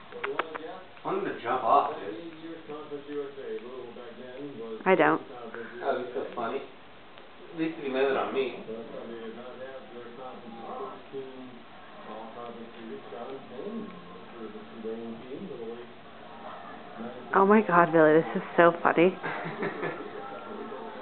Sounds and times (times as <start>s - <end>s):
Speech: 0.1s - 6.7s, 7.6s - 16.0s.